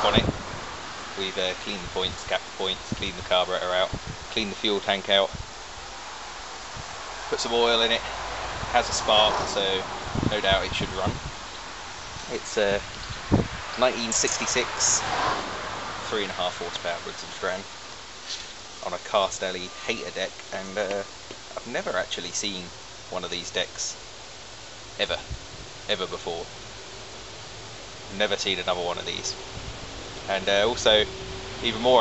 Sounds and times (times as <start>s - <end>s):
Speech: 0.0s - 0.3s, 1.2s - 5.4s, 7.3s - 8.1s, 8.7s - 11.2s, 12.3s - 12.8s, 13.8s - 15.0s, 16.0s - 17.7s, 18.8s - 24.0s, 25.0s - 25.3s, 25.9s - 26.5s, 28.1s - 29.4s, 30.3s - 32.0s.